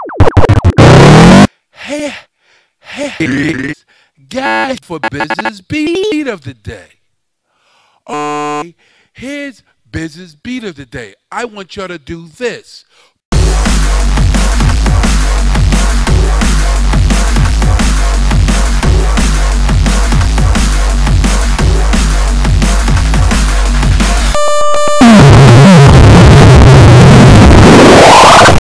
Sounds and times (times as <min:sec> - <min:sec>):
Music: 0:13.4 - 0:28.6.